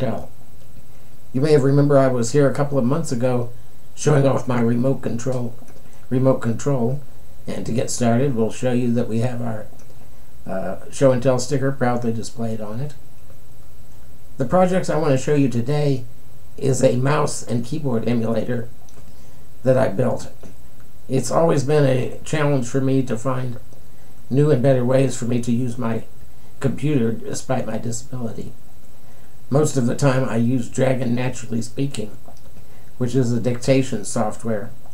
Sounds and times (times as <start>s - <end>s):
Speech: 0.0s - 0.4s, 1.3s - 9.8s, 10.4s - 13.0s, 14.4s - 18.8s, 19.6s - 20.5s, 21.1s - 23.7s, 24.3s - 28.6s, 29.5s - 32.2s, 33.0s - 34.8s.